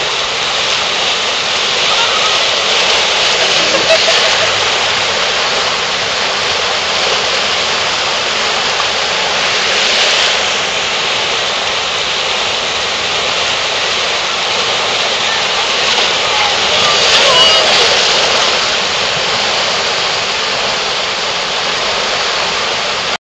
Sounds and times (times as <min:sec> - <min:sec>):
Stream: 0:00.0 - 0:23.2
Speech: 0:15.2 - 0:18.4.